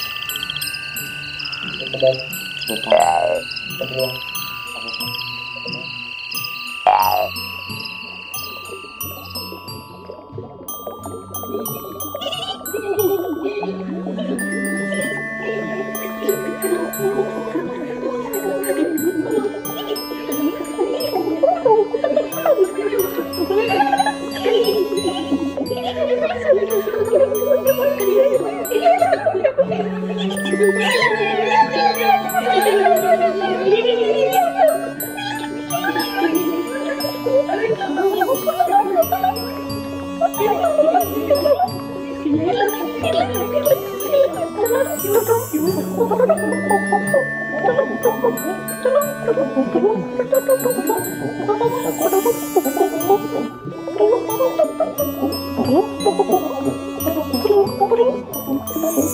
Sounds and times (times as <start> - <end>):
Music: 0.0 - 59.1.